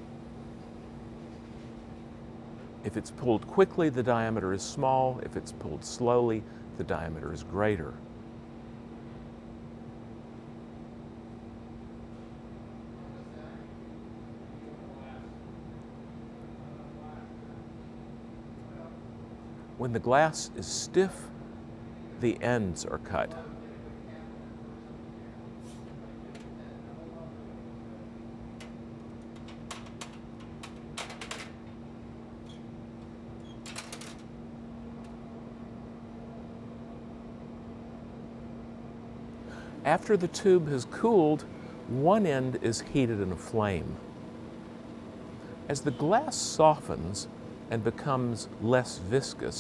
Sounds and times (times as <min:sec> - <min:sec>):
Speech: 0:02.9 - 0:08.0, 0:13.0 - 0:13.7, 0:14.6 - 0:15.4, 0:16.7 - 0:17.5, 0:19.8 - 0:21.4, 0:22.2 - 0:24.5, 0:26.4 - 0:27.4, 0:39.9 - 0:44.0, 0:45.7 - 0:49.6.